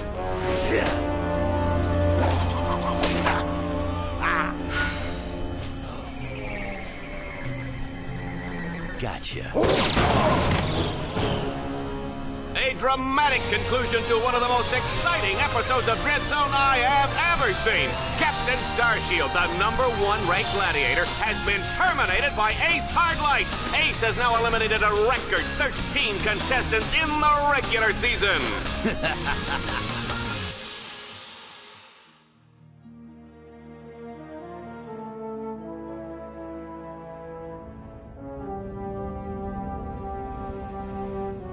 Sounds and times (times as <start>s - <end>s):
Music: 0.0s - 41.5s
Speech: 9.0s - 9.6s, 12.6s - 28.6s.